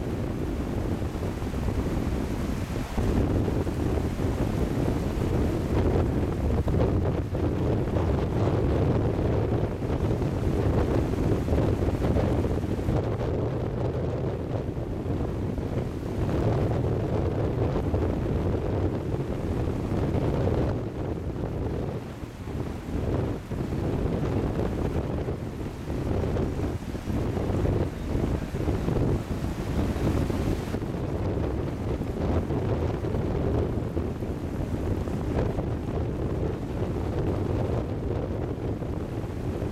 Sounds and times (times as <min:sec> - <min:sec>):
Wind noise (microphone): 0:00.0 - 0:39.7.